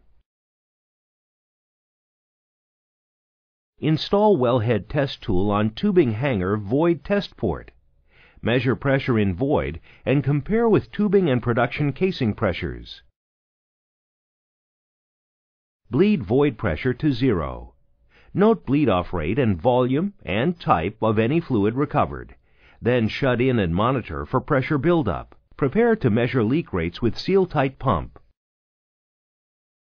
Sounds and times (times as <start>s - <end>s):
Speech: 3.8s - 7.8s, 8.4s - 13.1s, 15.9s - 28.3s.